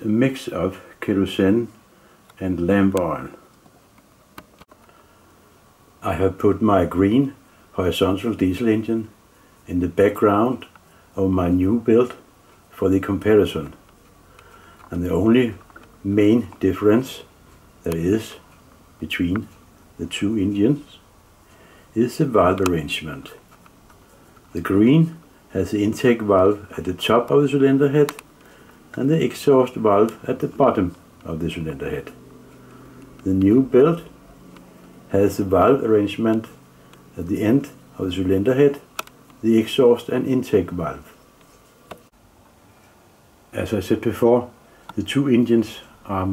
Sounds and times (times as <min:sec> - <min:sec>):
Speech: 0:00.0 - 0:01.8, 0:02.4 - 0:03.5, 0:06.0 - 0:13.9, 0:14.9 - 0:21.1, 0:21.9 - 0:23.4, 0:24.5 - 0:28.2, 0:28.9 - 0:32.2, 0:33.2 - 0:34.2, 0:35.1 - 0:41.2, 0:43.5 - 0:46.3.